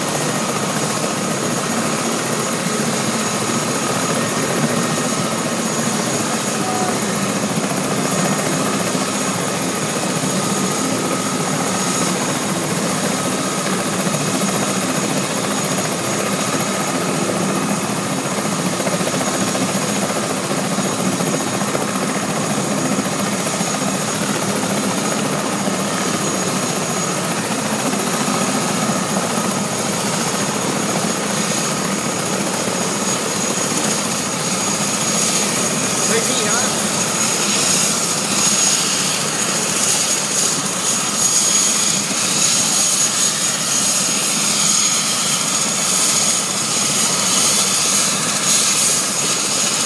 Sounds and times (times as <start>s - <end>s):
Helicopter: 0.0s - 49.8s
Speech: 6.6s - 7.2s, 36.0s - 36.8s.